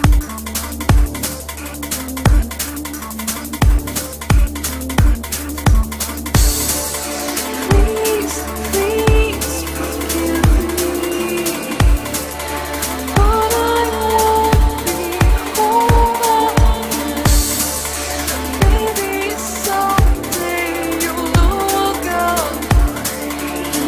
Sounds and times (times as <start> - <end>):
Dubstep: 0.0 - 23.8.